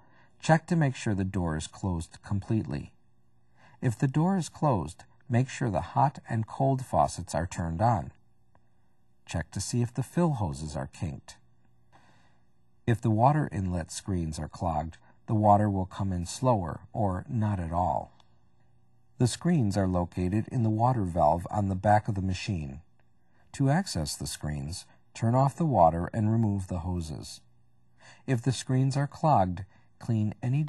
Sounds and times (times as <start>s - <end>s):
Speech: 0.4s - 3.0s, 3.8s - 8.2s, 9.2s - 11.4s, 12.8s - 18.2s, 19.2s - 22.9s, 23.5s - 27.5s, 28.1s - 30.6s.